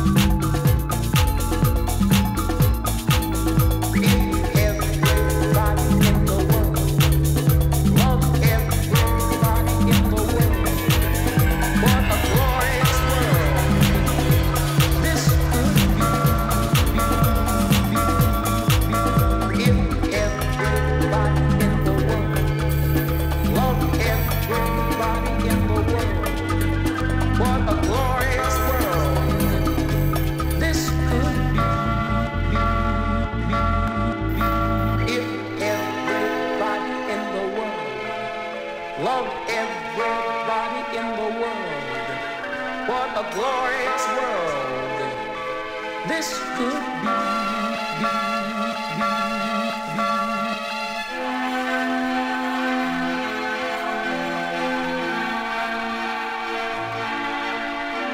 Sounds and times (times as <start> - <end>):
Salsa music: 0.0 - 58.1.